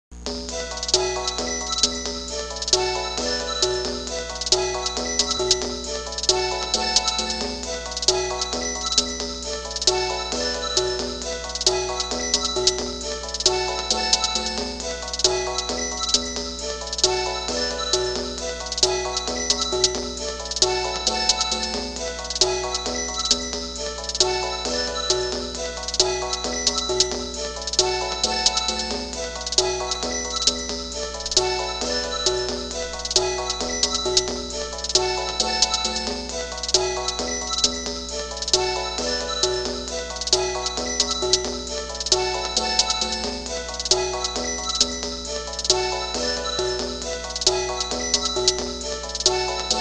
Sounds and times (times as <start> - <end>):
Exciting music: 0.4 - 49.8.